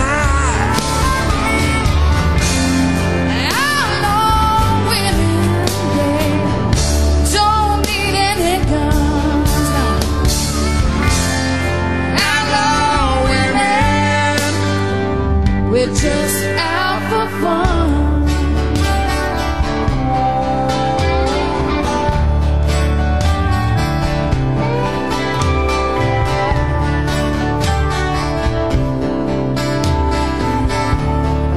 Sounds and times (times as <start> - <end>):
Country: 0.0 - 31.5.